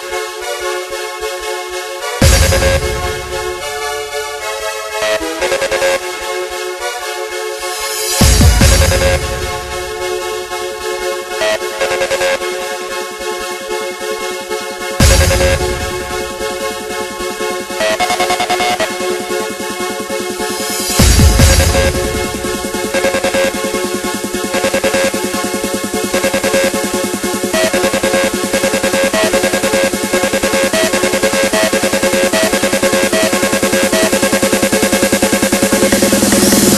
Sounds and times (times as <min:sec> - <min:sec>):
Techno: 0:00.0 - 0:36.7.